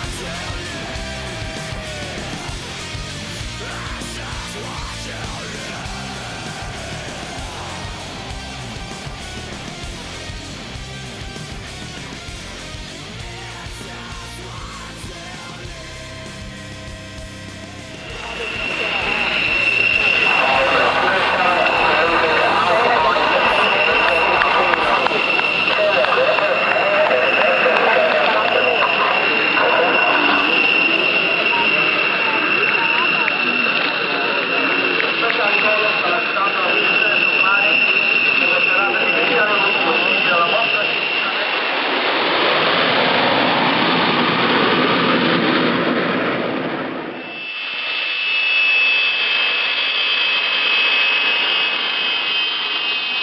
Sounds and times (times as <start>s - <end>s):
Speech: 0.0s - 10.4s, 12.4s - 16.6s, 18.0s - 41.6s
Fixed-wing aircraft, airplane: 0.0s - 53.2s.